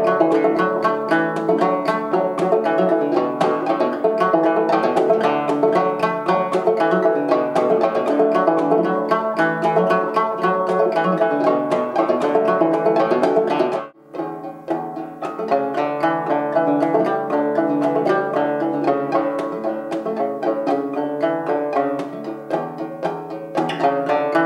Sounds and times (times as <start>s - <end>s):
Musical instrument: 0.0s - 24.4s.